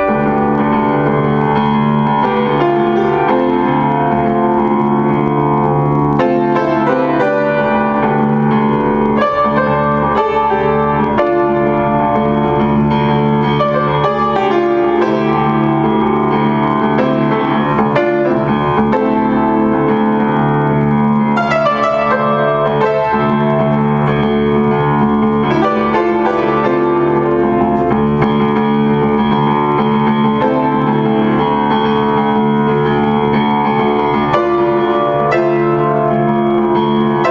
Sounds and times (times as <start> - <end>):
Music: 0.0 - 37.3.